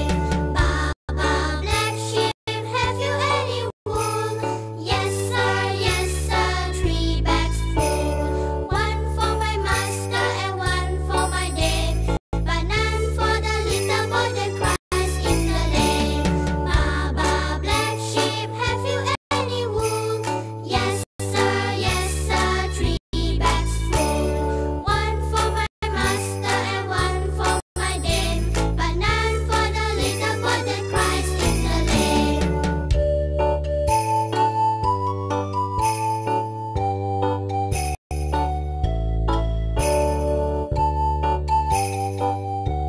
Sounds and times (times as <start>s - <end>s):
Music: 0.0s - 42.8s.